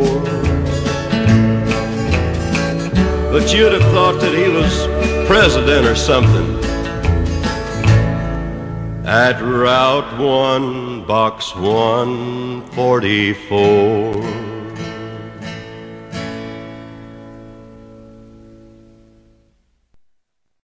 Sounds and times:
Singing: 3.0s - 6.6s, 9.1s - 14.8s.

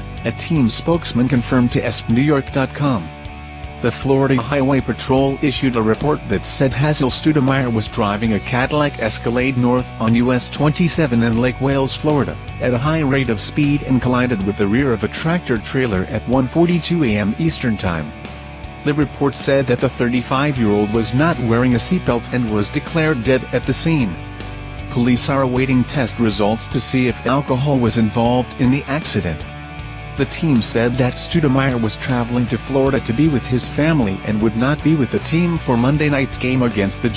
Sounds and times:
Music: 0.0s - 37.1s
Speech: 0.2s - 3.2s, 3.8s - 18.2s, 18.8s - 24.2s, 24.9s - 29.5s, 30.2s - 37.1s.

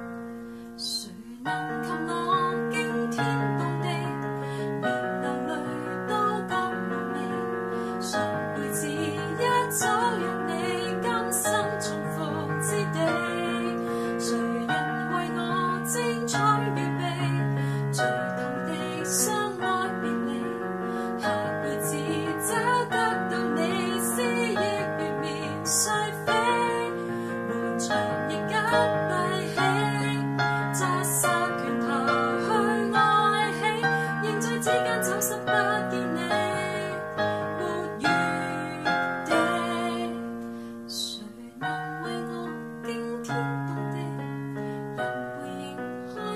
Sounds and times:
Piano: 0.0s - 46.3s.

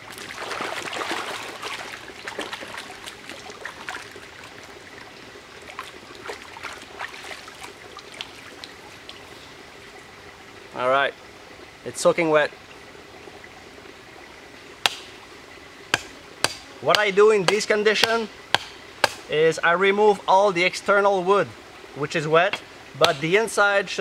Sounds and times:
Outside, rural or natural: 0.0s - 24.0s
Water: 0.0s - 24.0s
Speech: 11.9s - 12.5s, 16.8s - 18.3s, 19.3s - 24.0s.

